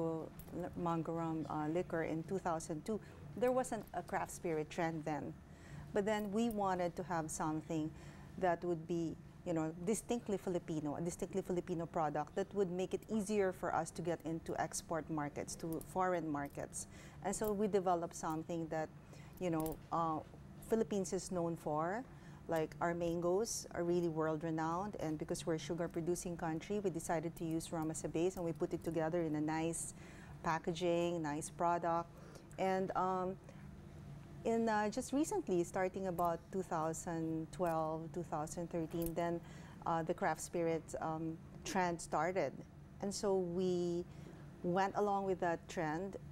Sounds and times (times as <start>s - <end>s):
Speech: 0.0s - 5.4s, 6.0s - 33.4s, 34.5s - 46.2s.